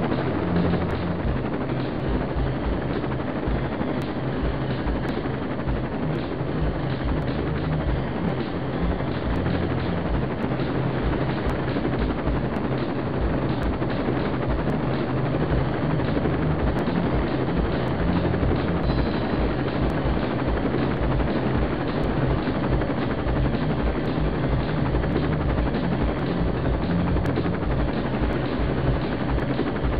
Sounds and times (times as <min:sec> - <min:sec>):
Music: 0:00.0 - 0:29.9
Vehicle: 0:00.0 - 0:29.9.